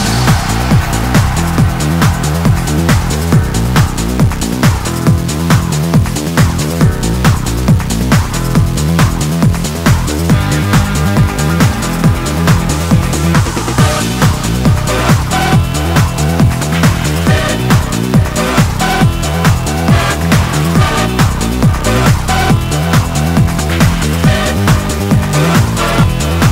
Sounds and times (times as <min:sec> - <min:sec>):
Trance music: 0:00.0 - 0:26.5.